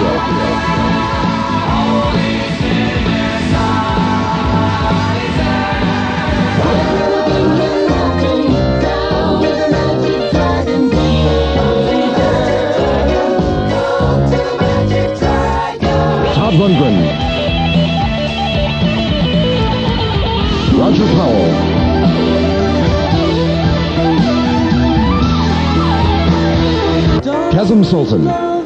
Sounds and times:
Music: 0.0s - 28.6s
Speech: 16.3s - 17.2s, 20.7s - 21.7s, 27.2s - 28.5s.

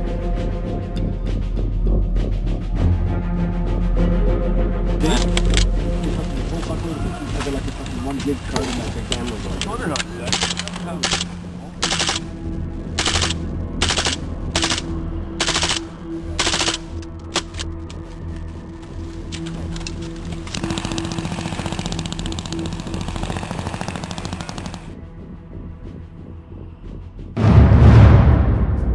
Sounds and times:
Music: 0.0s - 28.9s
Speech: 5.0s - 5.3s, 6.0s - 11.8s
Outside, rural or natural: 5.0s - 28.9s.

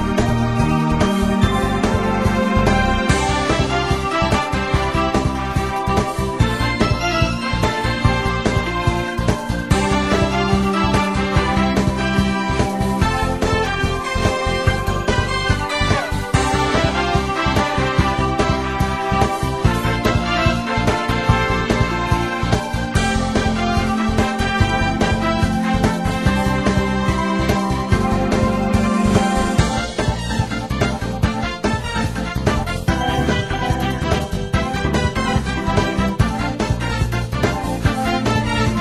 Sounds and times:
Music: 0.0s - 38.8s.

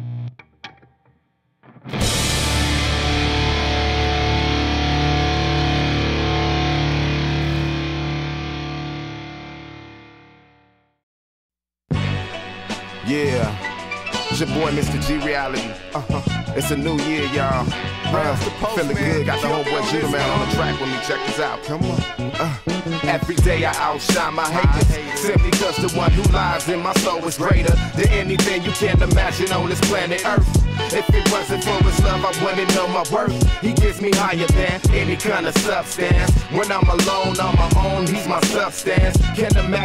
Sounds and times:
Music: 0.0s - 11.0s, 11.9s - 39.8s.

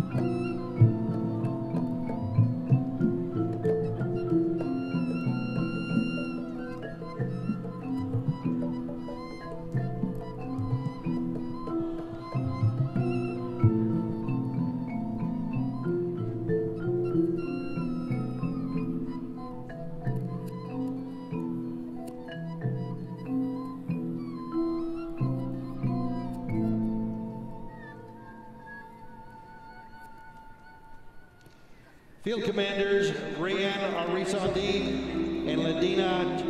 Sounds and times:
Music: 0.0s - 36.4s.

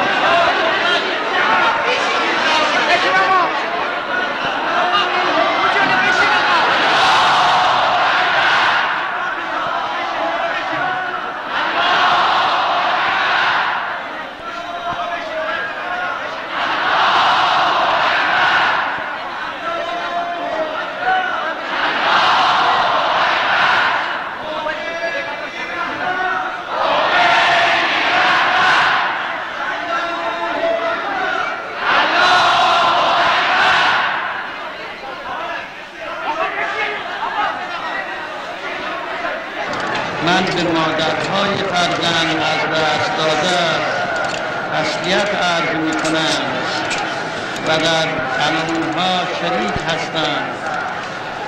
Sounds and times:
Male speech, man speaking: 0.2s - 3.7s, 4.7s - 6.8s, 9.4s - 11.3s, 14.1s - 16.4s, 19.4s - 21.6s, 24.4s - 26.6s, 29.6s - 31.6s, 34.7s - 39.4s, 40.2s - 46.9s, 47.6s - 50.9s.

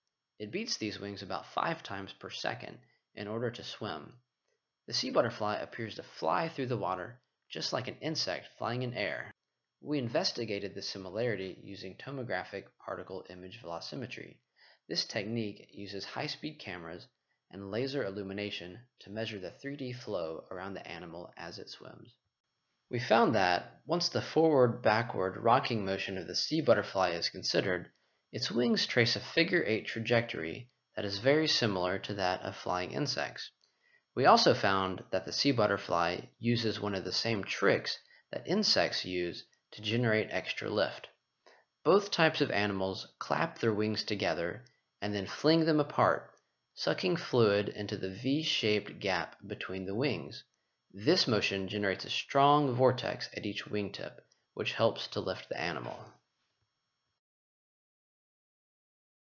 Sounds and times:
Speech: 0.4s - 4.2s, 4.9s - 22.2s, 22.9s - 33.6s, 34.2s - 41.1s, 41.9s - 56.1s.

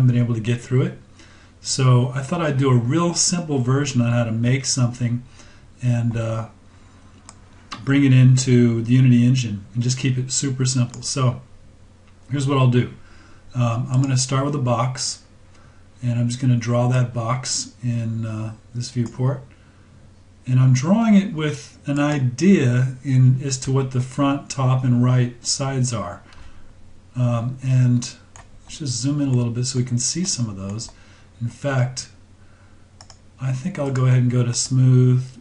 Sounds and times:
Speech: 0.0s - 6.6s, 7.8s - 11.5s, 12.3s - 15.3s, 16.0s - 19.5s, 20.4s - 26.3s, 27.2s - 32.2s, 33.4s - 35.4s.

